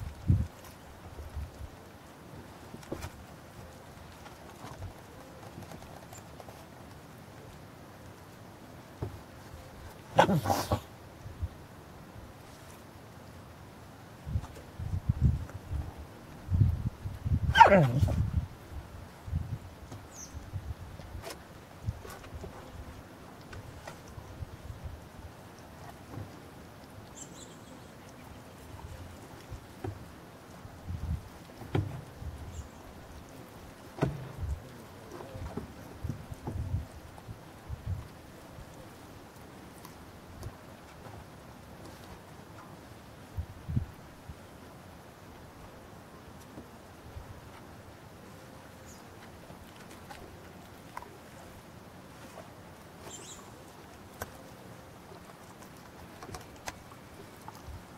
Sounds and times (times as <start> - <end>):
Dog: 10.2 - 10.9, 17.5 - 18.2.